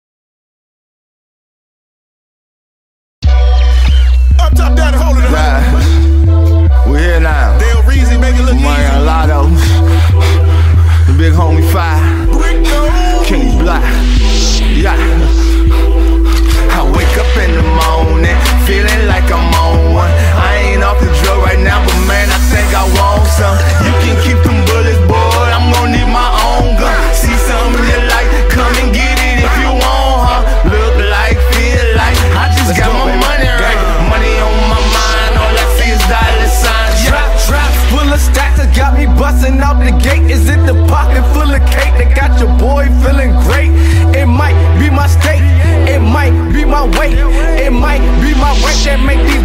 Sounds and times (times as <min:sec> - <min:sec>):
Music: 0:03.2 - 0:49.4.